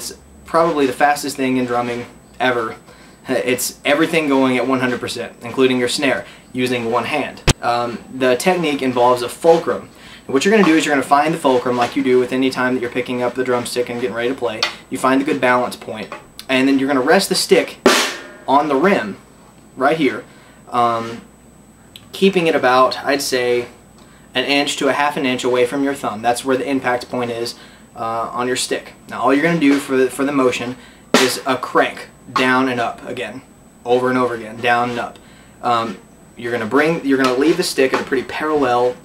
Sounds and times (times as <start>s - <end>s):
Speech: 0.0s - 17.8s, 18.5s - 19.2s, 19.8s - 21.3s, 22.0s - 39.0s.